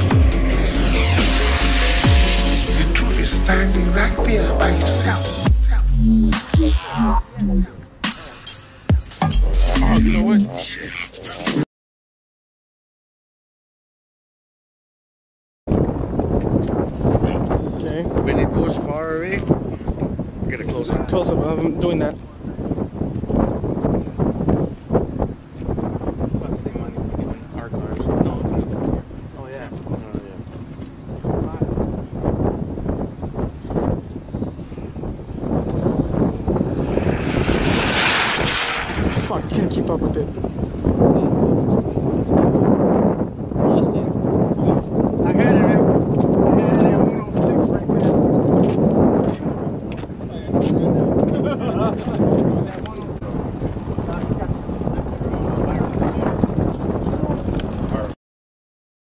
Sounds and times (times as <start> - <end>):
Speech: 2.8 - 6.0, 9.7 - 11.6, 17.2 - 19.9, 20.5 - 22.6, 26.4 - 30.4, 31.3 - 31.8, 39.2 - 40.3, 43.6 - 45.9, 46.5 - 48.2, 49.2 - 56.4, 57.1 - 58.2
Aircraft engine: 35.7 - 40.6.